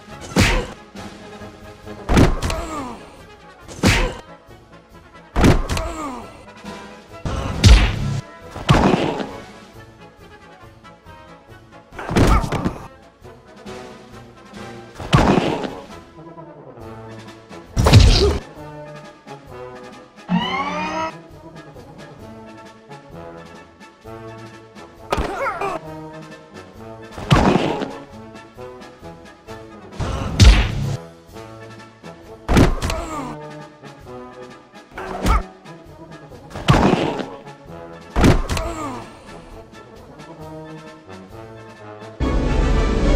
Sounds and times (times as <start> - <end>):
Music: 0.0 - 43.1.